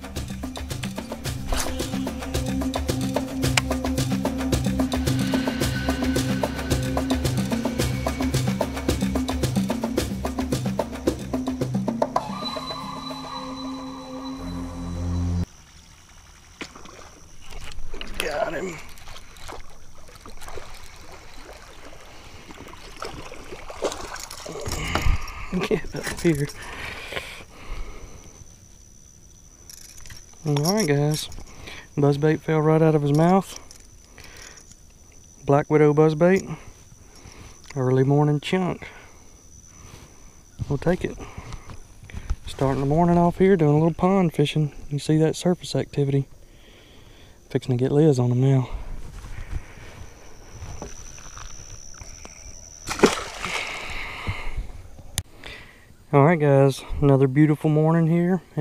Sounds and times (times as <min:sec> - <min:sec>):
Music: 0:00.0 - 0:15.5.